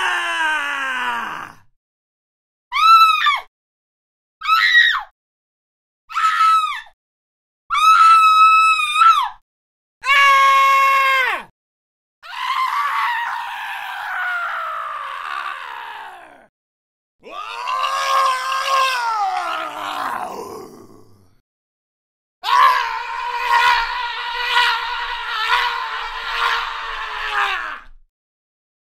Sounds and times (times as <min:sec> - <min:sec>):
Screaming: 0:00.0 - 0:01.7, 0:02.7 - 0:03.5, 0:04.4 - 0:05.2, 0:06.1 - 0:07.0, 0:07.7 - 0:09.4, 0:10.0 - 0:11.5, 0:12.2 - 0:16.5, 0:17.2 - 0:21.4, 0:22.4 - 0:28.1.